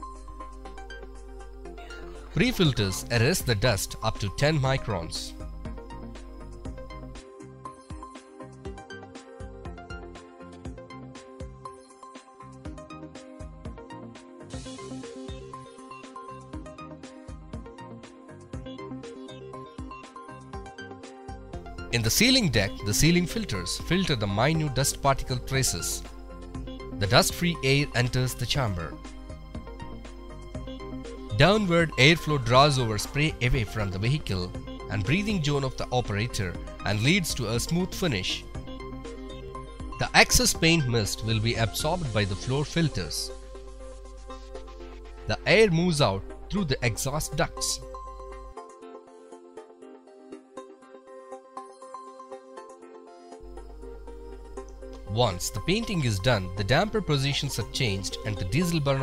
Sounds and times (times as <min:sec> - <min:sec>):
Music: 0:00.0 - 0:59.0.